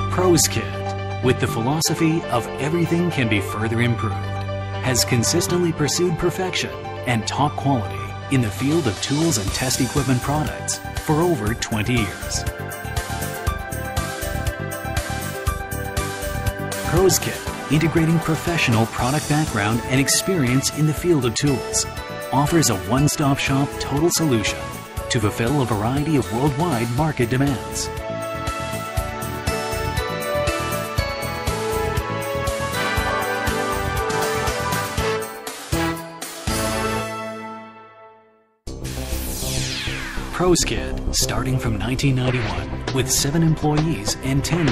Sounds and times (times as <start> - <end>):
Speech: 0.0 - 4.2, 4.8 - 12.5, 16.8 - 28.0, 40.3 - 44.7
Music: 0.0 - 44.7.